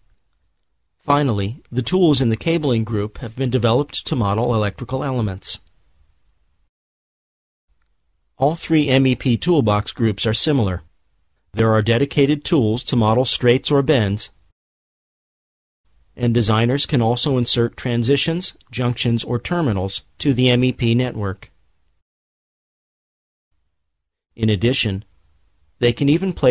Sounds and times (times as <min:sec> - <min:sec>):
Speech: 0:01.1 - 0:05.7, 0:08.4 - 0:10.9, 0:11.6 - 0:14.4, 0:16.2 - 0:21.6, 0:24.4 - 0:25.1, 0:25.8 - 0:26.5.